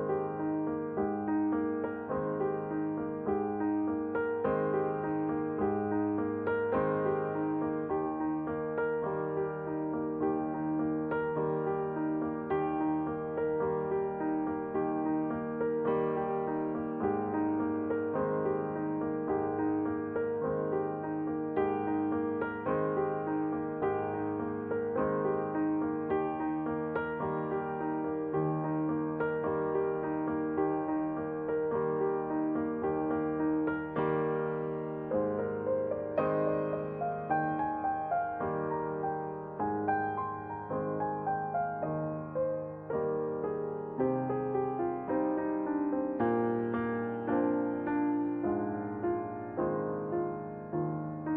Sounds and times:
Music: 0.0s - 51.3s.

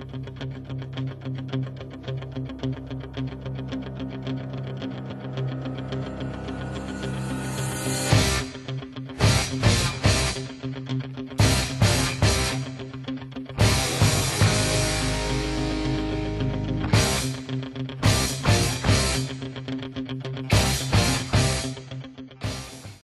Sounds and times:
Music: 0.0s - 23.0s.

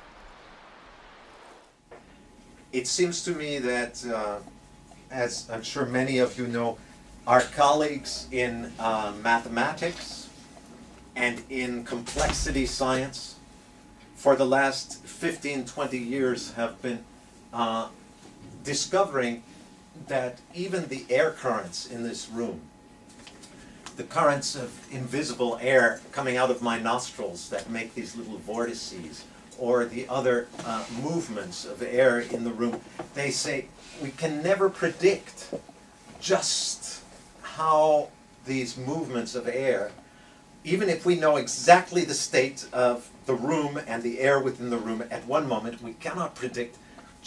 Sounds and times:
Speech: 2.8s - 10.4s, 11.2s - 13.4s, 14.2s - 18.0s, 18.6s - 22.7s, 24.0s - 35.6s, 36.2s - 40.0s, 40.6s - 47.2s.

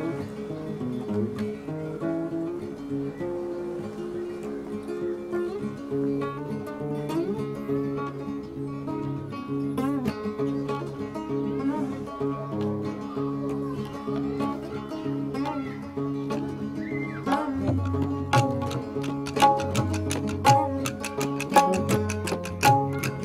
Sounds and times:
Music: 0.0s - 23.2s
Speech: 10.3s - 17.8s.

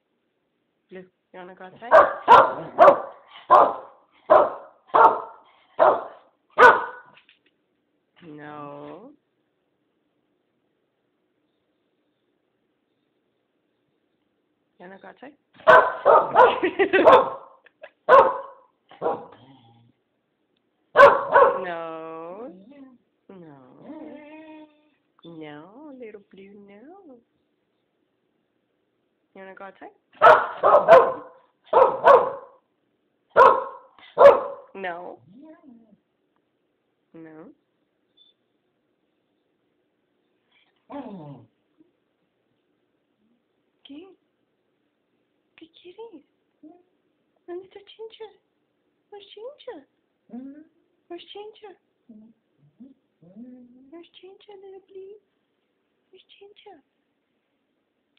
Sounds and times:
Speech: 0.9s - 2.0s, 8.2s - 9.2s, 14.8s - 15.4s, 21.6s - 24.4s, 25.3s - 27.3s, 29.4s - 30.0s, 43.9s - 44.2s, 45.6s - 46.9s, 47.5s - 48.4s, 49.2s - 55.3s, 56.1s - 56.9s.

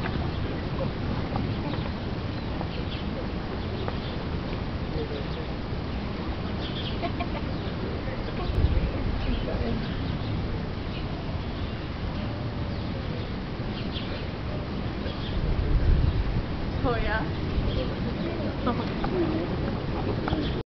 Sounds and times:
Speech: 16.8s - 20.6s.

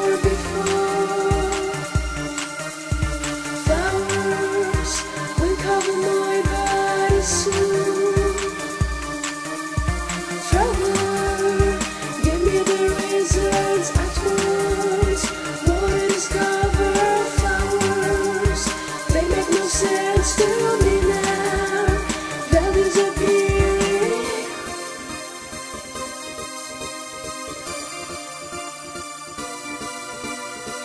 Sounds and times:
Music: 0.0s - 30.8s.

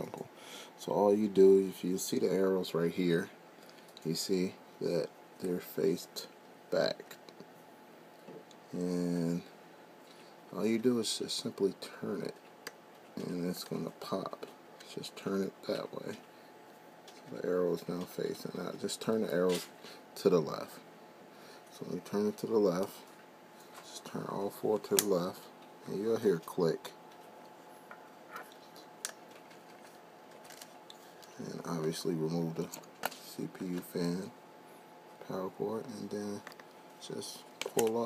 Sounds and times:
Speech: 0.0s - 3.4s, 4.0s - 7.4s, 8.7s - 9.6s, 10.5s - 12.4s, 13.2s - 16.3s, 17.2s - 20.9s, 21.7s - 23.1s, 23.8s - 27.0s, 31.4s - 34.4s, 35.2s - 38.0s.

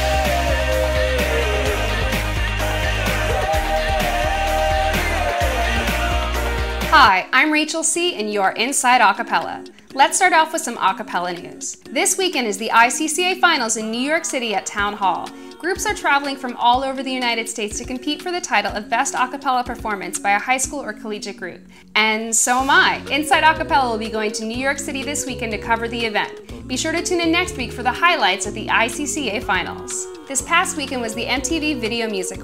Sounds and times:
Music: 0.0s - 32.4s
Speech: 7.0s - 32.4s.

